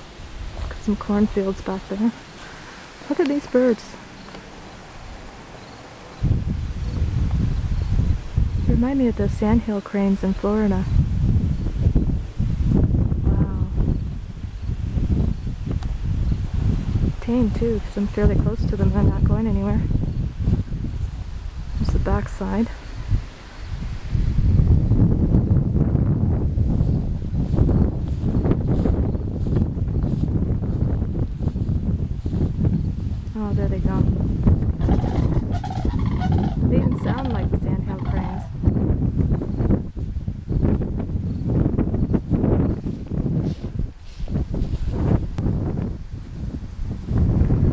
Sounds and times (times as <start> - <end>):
Outside, rural or natural: 0.0 - 47.7
Speech: 0.7 - 2.2, 3.1 - 4.0, 8.7 - 10.9, 17.2 - 19.9, 21.8 - 22.8, 33.4 - 34.1, 36.7 - 38.5
Goose: 34.8 - 38.6.